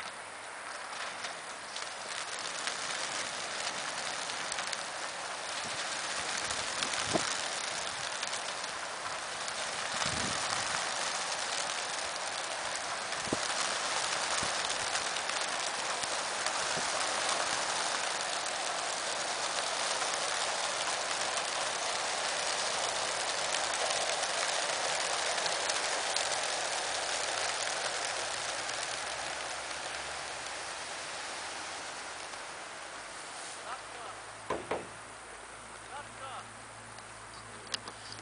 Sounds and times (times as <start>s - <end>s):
Outside, rural or natural: 0.0s - 38.2s
Speech: 33.6s - 34.2s, 35.9s - 36.5s.